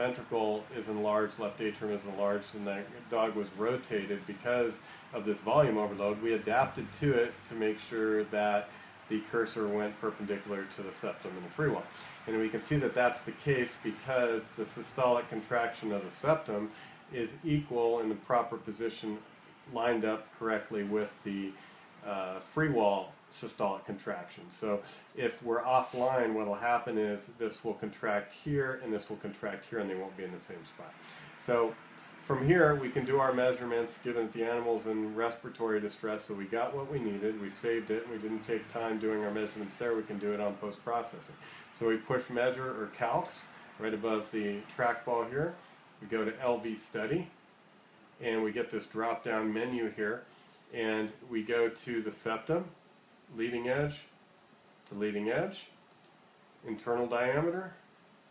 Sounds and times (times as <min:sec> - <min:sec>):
Speech: 0:00.0 - 0:47.4, 0:48.2 - 0:54.2, 0:54.9 - 0:55.8, 0:56.6 - 0:57.8.